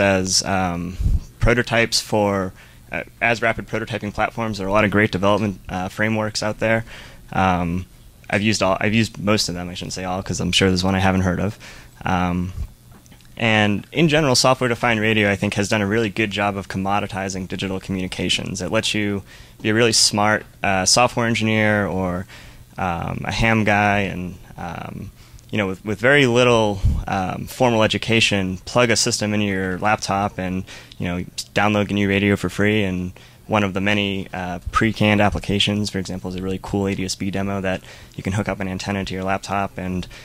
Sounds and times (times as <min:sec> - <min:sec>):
Speech: 0:00.0 - 0:12.7, 0:13.4 - 0:40.1.